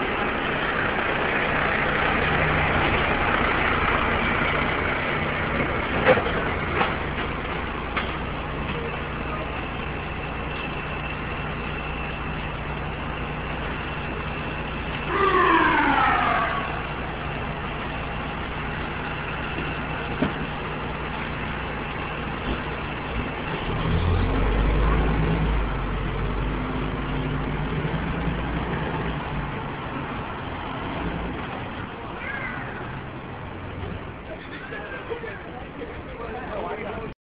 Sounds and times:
Vehicle: 0:00.0 - 0:37.2
Speech: 0:08.7 - 0:09.8, 0:34.2 - 0:37.2.

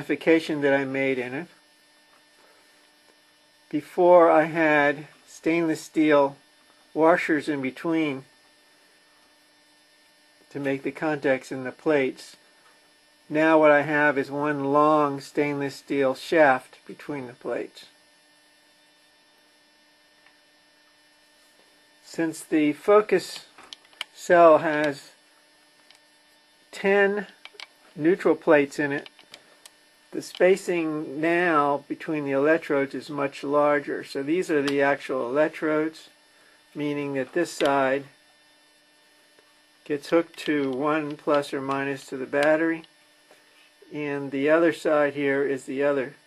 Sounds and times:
Speech: 0:00.0 - 0:01.6, 0:03.7 - 0:06.4, 0:07.0 - 0:08.3, 0:10.5 - 0:12.4, 0:13.3 - 0:18.0, 0:22.0 - 0:23.6, 0:24.2 - 0:25.2, 0:26.7 - 0:27.4, 0:28.0 - 0:29.1, 0:30.1 - 0:36.2, 0:36.8 - 0:38.2, 0:39.8 - 0:42.9, 0:43.8 - 0:46.2.

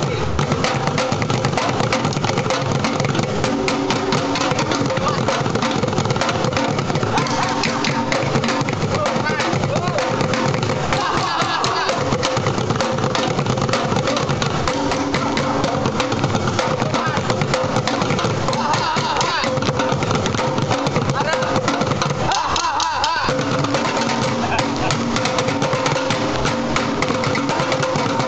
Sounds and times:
Middle Eastern music: 0:00.0 - 0:28.2
Percussion: 0:00.0 - 0:28.2.

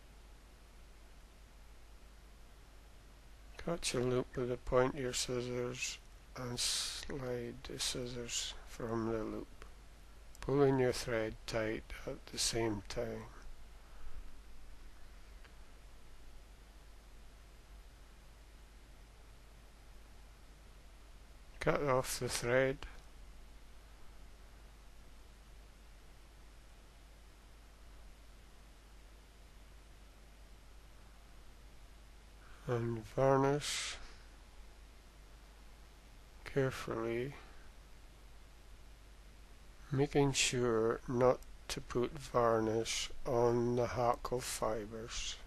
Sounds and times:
Speech: 0:03.6 - 0:09.5, 0:10.4 - 0:13.4, 0:21.6 - 0:23.0, 0:32.6 - 0:34.1, 0:36.4 - 0:37.6, 0:39.9 - 0:45.4.

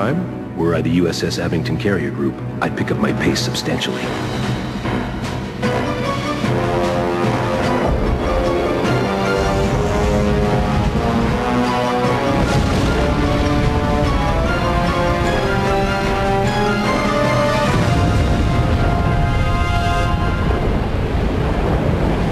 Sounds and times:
Theme music: 0:00.0 - 0:22.3.

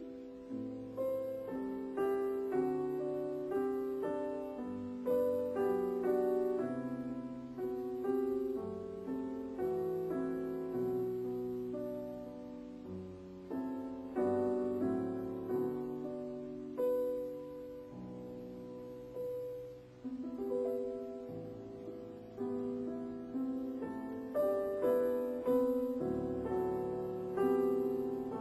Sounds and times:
Music: 0:00.0 - 0:28.4.

